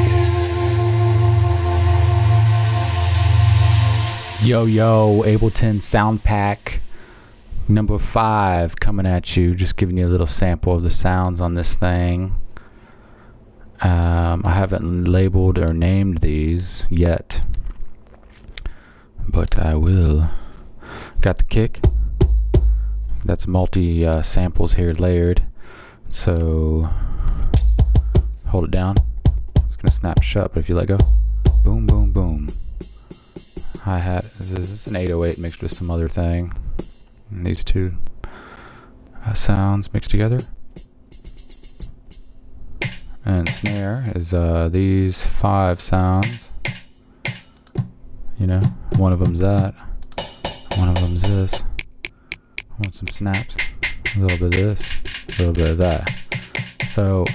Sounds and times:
Speech: 4.4s - 6.8s, 7.6s - 12.4s, 13.8s - 17.5s, 19.2s - 20.4s, 21.2s - 21.8s, 23.2s - 25.5s, 26.1s - 27.0s, 28.5s - 29.0s, 29.7s - 32.5s, 33.8s - 36.6s, 37.3s - 38.0s, 39.2s - 40.5s, 43.2s - 46.6s, 48.4s - 49.9s, 50.8s - 51.7s, 52.8s - 53.6s, 54.2s - 56.1s, 56.9s - 57.3s.

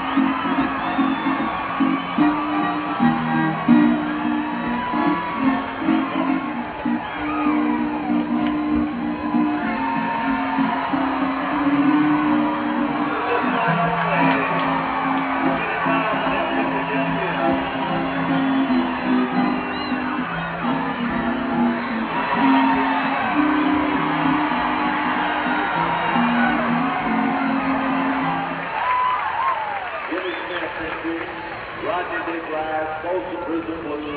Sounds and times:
Whoop: 0.0s - 30.2s
Music: 0.0s - 31.4s.

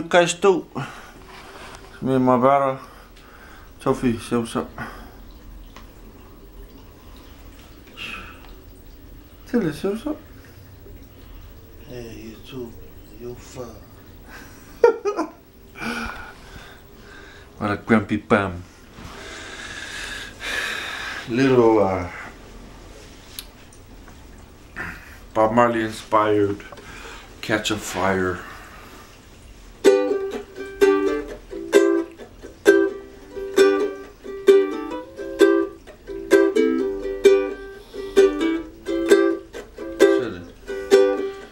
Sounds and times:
Speech: 0.0s - 0.7s, 2.0s - 2.8s, 3.8s - 4.8s, 9.5s - 10.2s, 11.8s - 13.9s, 17.6s - 18.6s, 21.3s - 22.2s, 25.4s - 26.6s, 27.4s - 28.4s, 40.2s - 40.5s.

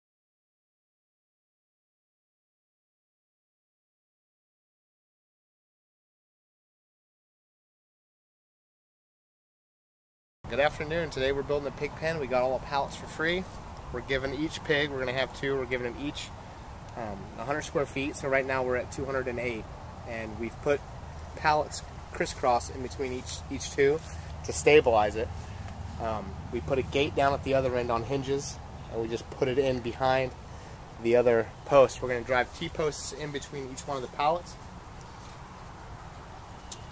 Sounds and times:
Speech: 10.5s - 16.3s, 16.9s - 20.8s, 21.4s - 25.3s, 26.0s - 30.4s, 31.0s - 34.6s.

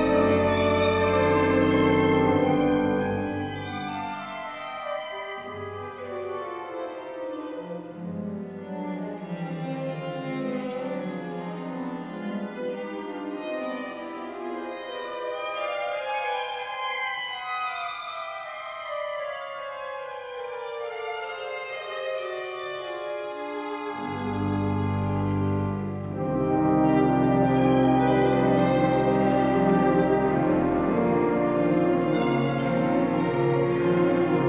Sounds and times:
Violin, fiddle: 0.0s - 34.4s.

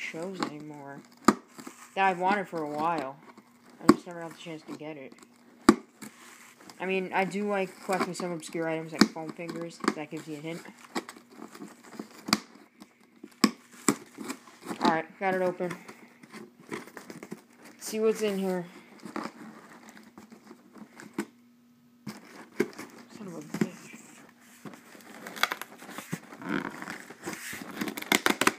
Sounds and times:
Speech: 0.0s - 1.0s, 2.0s - 3.2s, 3.8s - 5.2s, 6.8s - 10.8s, 14.8s - 15.8s, 17.8s - 18.7s, 23.1s - 24.2s.

